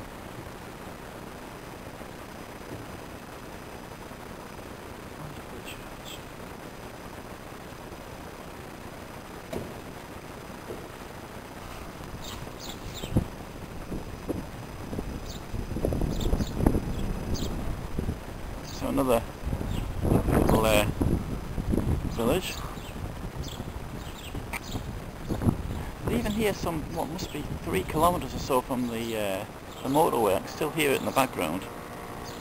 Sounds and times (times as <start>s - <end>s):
Outside, rural or natural: 0.0s - 32.4s
Speech: 18.7s - 19.3s, 20.4s - 20.9s, 22.1s - 22.7s, 26.1s - 31.7s.